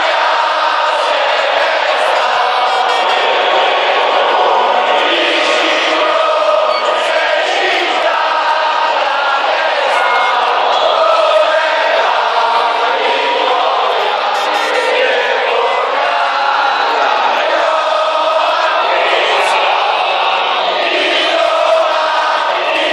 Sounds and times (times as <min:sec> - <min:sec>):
Choir: 0:00.0 - 0:22.9.